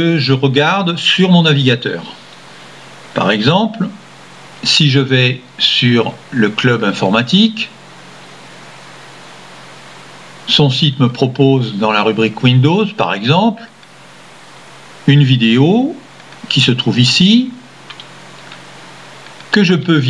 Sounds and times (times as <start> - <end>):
Speech: 0.0 - 2.2, 3.2 - 4.0, 4.6 - 7.8, 10.5 - 13.8, 15.0 - 17.7, 19.5 - 20.0.